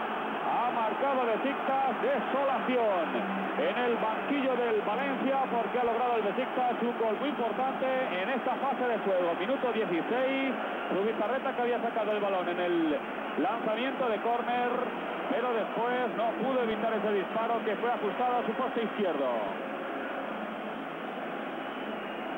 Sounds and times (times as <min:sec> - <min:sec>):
Speech: 0:00.5 - 0:19.6.